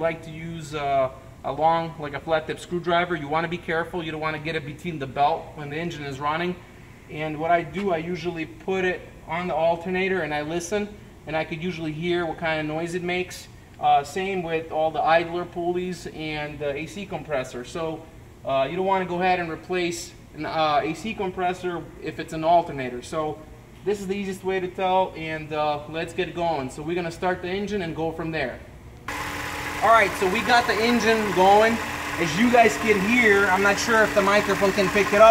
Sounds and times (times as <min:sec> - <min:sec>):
Speech: 0:00.0 - 0:28.7, 0:29.8 - 0:35.3.